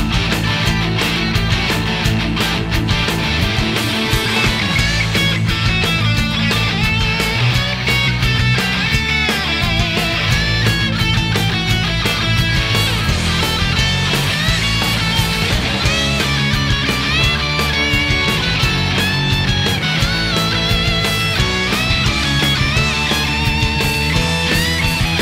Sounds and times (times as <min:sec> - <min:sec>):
Music: 0:00.0 - 0:25.2.